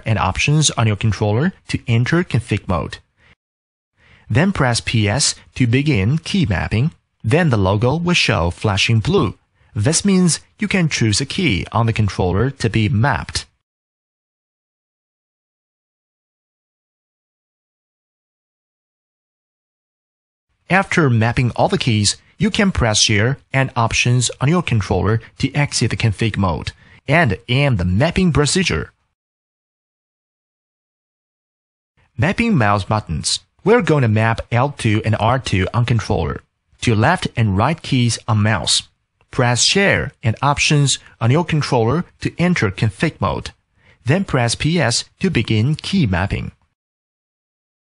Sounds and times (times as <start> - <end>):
Speech: 0.0 - 3.1, 4.3 - 13.6, 20.7 - 29.0, 32.2 - 46.6.